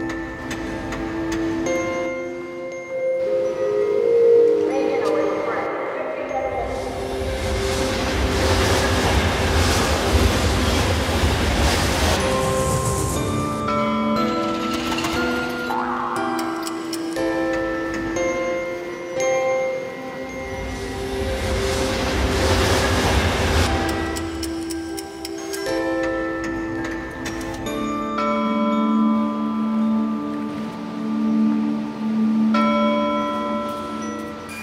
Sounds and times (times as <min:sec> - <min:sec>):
Music: 0:00.0 - 0:34.6.